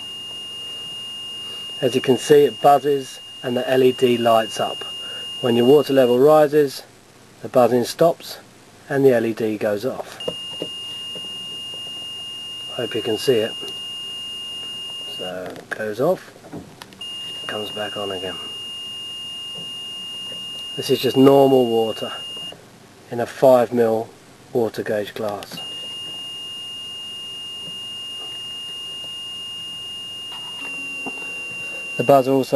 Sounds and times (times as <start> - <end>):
Speech: 1.8 - 10.2, 12.7 - 13.7, 15.1 - 16.3, 17.5 - 18.5, 20.8 - 22.2, 23.1 - 25.6, 32.0 - 32.5.